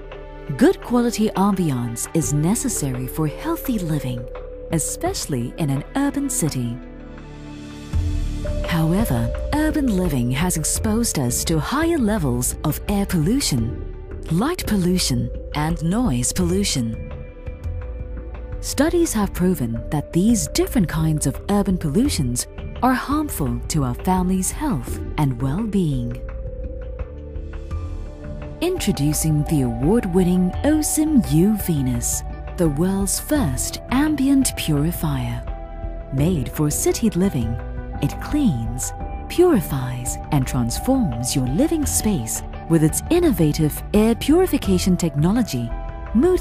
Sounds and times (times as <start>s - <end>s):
Music: 0.0s - 46.4s
Speech: 0.5s - 6.8s, 8.7s - 17.0s, 18.6s - 26.2s, 28.6s - 35.5s, 36.1s - 46.4s.